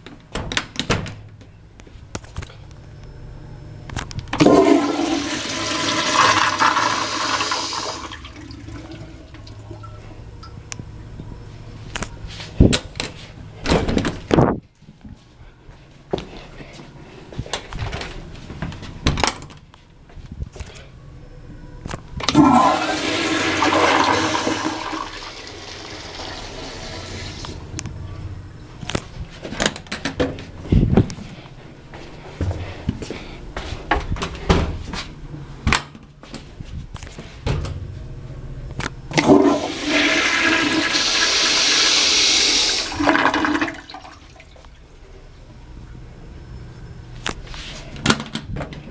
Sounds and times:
Toilet flush: 4.4 - 9.9, 22.3 - 27.6, 39.2 - 44.6.

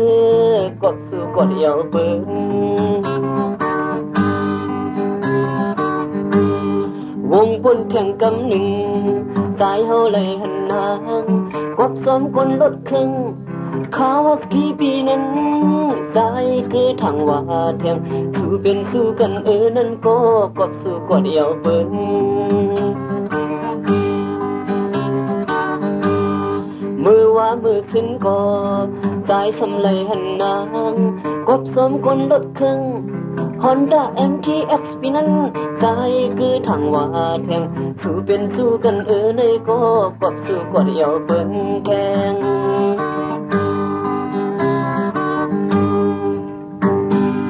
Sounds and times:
Music: 0.0 - 47.5.

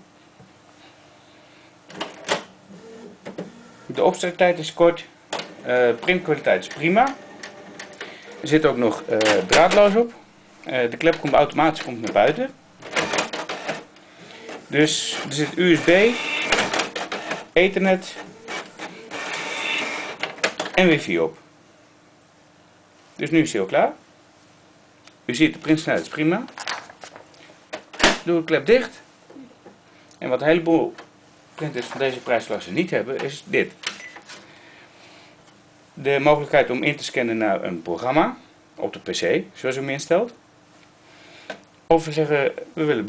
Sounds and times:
Printer: 2.3 - 3.8, 5.3 - 9.9, 12.8 - 20.6
Speech: 3.9 - 7.2, 8.4 - 12.6, 14.7 - 16.2, 17.6 - 18.3, 20.8 - 21.4, 23.2 - 24.0, 25.3 - 26.6, 28.2 - 29.5, 30.2 - 31.0, 31.6 - 33.8, 36.0 - 40.4, 41.9 - 43.0.

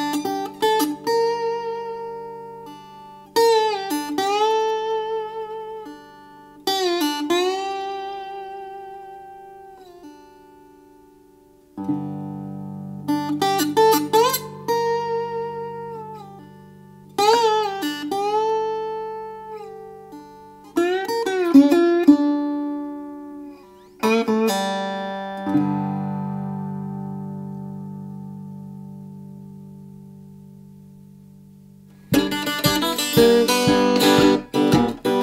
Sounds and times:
Guitar: 0.0 - 35.2.

